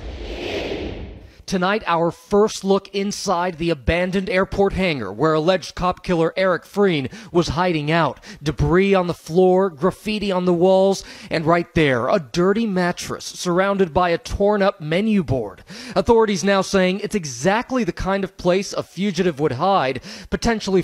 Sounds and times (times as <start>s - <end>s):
Speech: 1.5s - 20.8s.